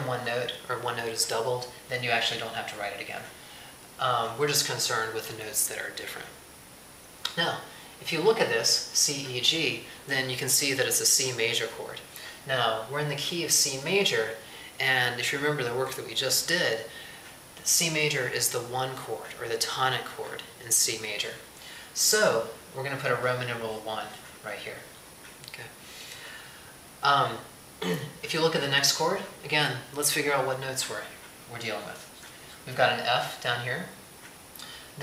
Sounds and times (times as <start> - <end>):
Speech: 0.0 - 3.4, 4.0 - 6.4, 7.3 - 17.0, 17.6 - 25.8, 27.0 - 34.0
Inside, small room: 0.0 - 35.0.